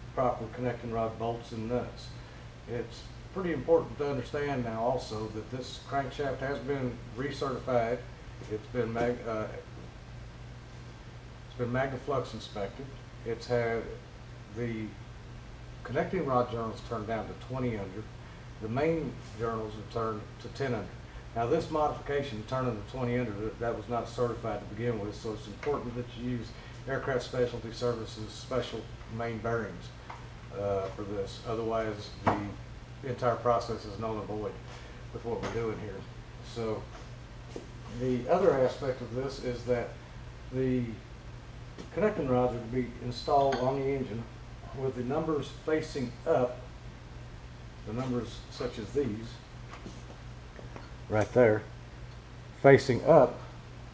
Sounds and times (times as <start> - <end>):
Speech: 0.1 - 9.7, 11.5 - 15.0, 15.8 - 37.0, 37.9 - 41.0, 41.9 - 46.7, 47.8 - 49.4, 51.1 - 51.7, 52.6 - 53.5.